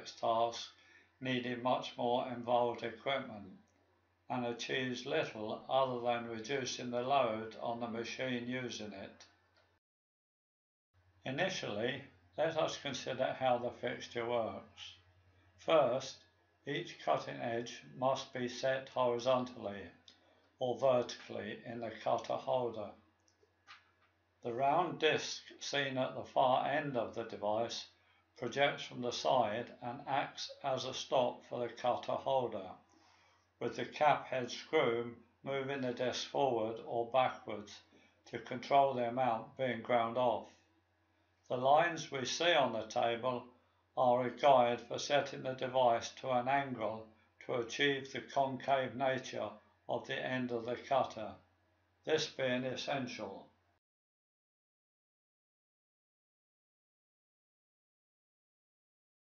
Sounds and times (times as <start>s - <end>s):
Speech: 0.0s - 3.6s, 4.3s - 9.4s, 11.3s - 15.0s, 15.6s - 23.0s, 24.4s - 32.8s, 33.6s - 40.6s, 41.5s - 51.5s, 52.1s - 53.5s.